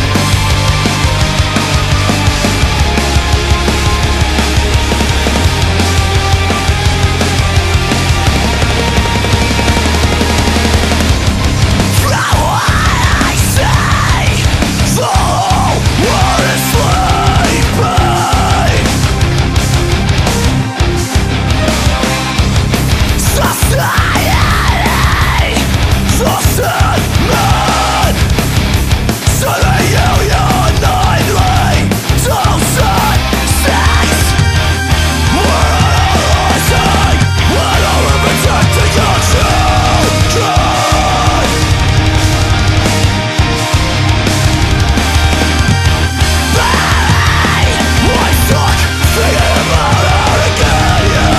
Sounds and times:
Music: 0.0 - 51.3.

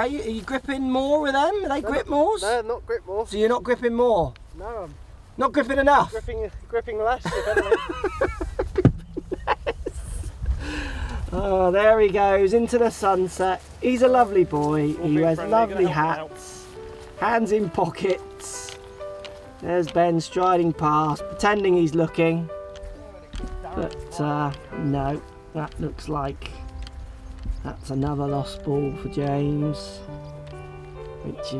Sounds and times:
Music: 0.0 - 4.0, 4.6 - 9.5, 10.2 - 31.5
Outside, rural or natural: 0.0 - 31.5
Speech: 11.3 - 16.6.

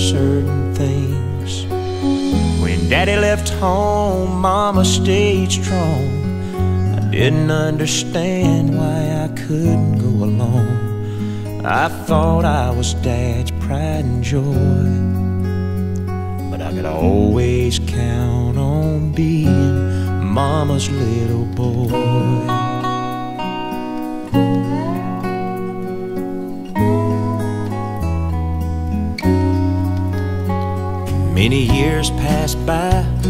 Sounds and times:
Independent music: 0.0 - 33.3
Soul music: 0.0 - 33.3.

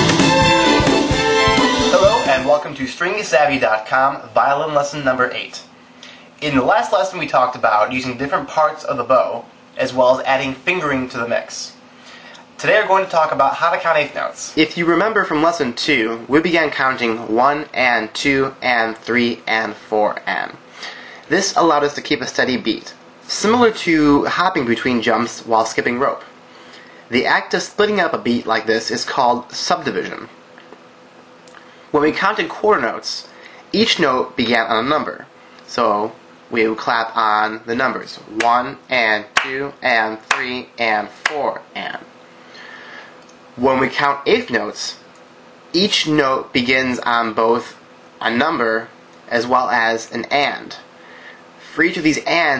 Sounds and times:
Speech: 1.9 - 5.8, 6.4 - 11.8, 12.6 - 20.6, 21.3 - 26.4, 27.1 - 30.4, 31.9 - 42.1, 43.6 - 45.1, 45.7 - 50.9, 51.6 - 52.5.

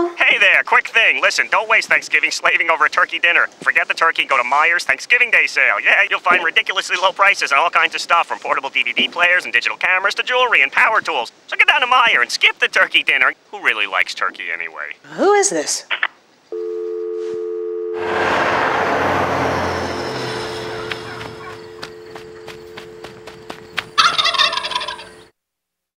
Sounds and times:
Gobble: 24.0 - 25.3.

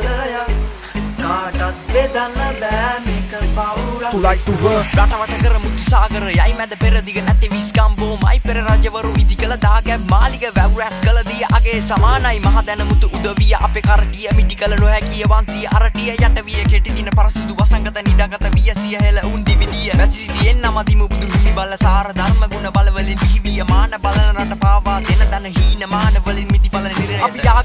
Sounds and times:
Music: 0.0 - 27.6.

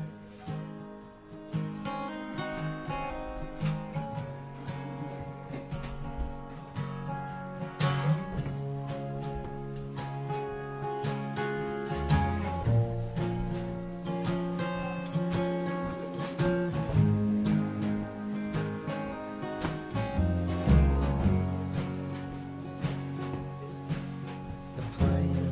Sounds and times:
Music: 0.0 - 25.5.

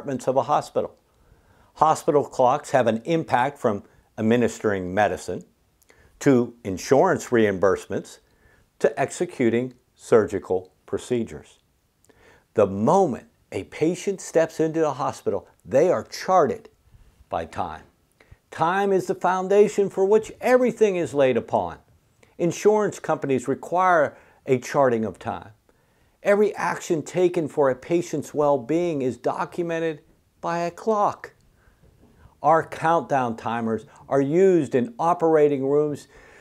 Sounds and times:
Speech: 0.0 - 1.0, 1.8 - 5.6, 6.2 - 11.7, 12.6 - 25.6, 26.2 - 31.4, 32.4 - 36.1.

